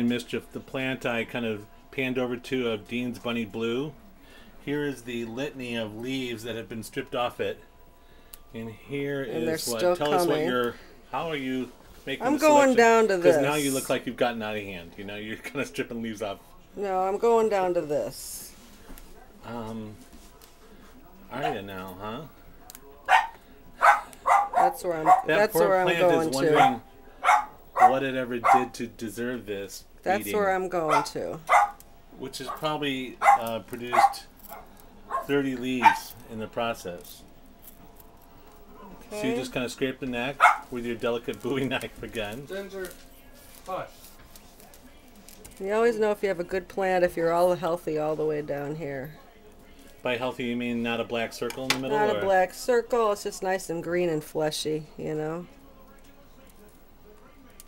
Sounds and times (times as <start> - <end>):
Inside, small room: 0.0 - 57.6
Speech: 8.6 - 10.6, 24.6 - 26.8.